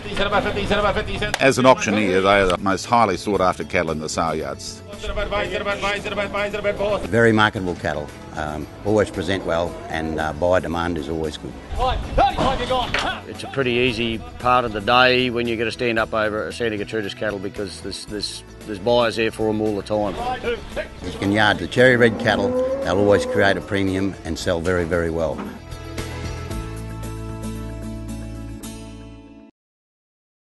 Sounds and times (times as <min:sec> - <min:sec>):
Speech: 0:00.0 - 0:25.5
Music: 0:00.0 - 0:29.5.